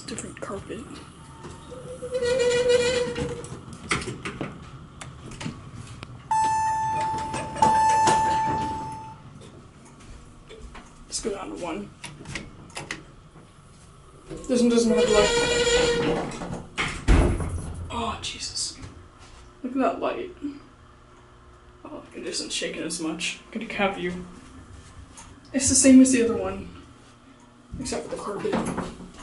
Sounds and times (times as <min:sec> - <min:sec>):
Speech: 0:00.0 - 0:01.1, 0:11.1 - 0:11.9, 0:14.4 - 0:15.5, 0:17.9 - 0:18.9, 0:19.6 - 0:20.6, 0:21.9 - 0:24.3, 0:25.5 - 0:26.8, 0:27.8 - 0:28.8.